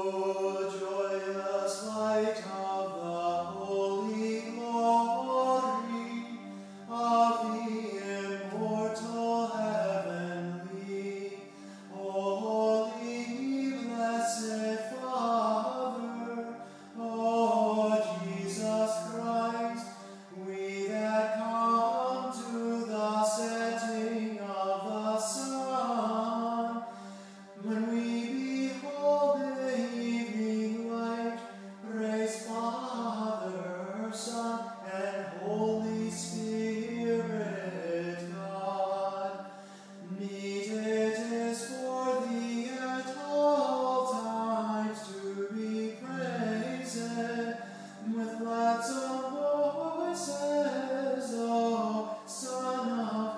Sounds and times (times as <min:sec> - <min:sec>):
Music: 0:00.0 - 0:53.3.